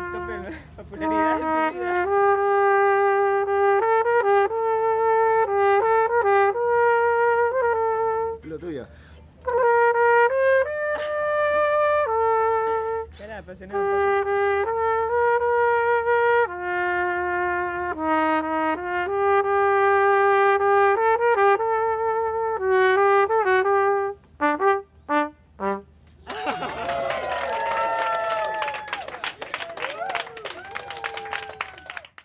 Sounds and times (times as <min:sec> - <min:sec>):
Trumpet: 0:00.0 - 0:08.8, 0:09.4 - 0:26.0.